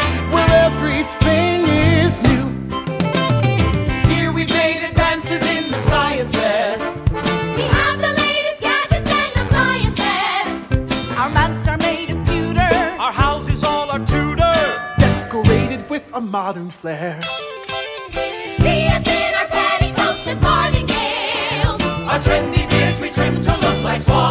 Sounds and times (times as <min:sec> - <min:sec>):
Music: 0:00.0 - 0:24.3.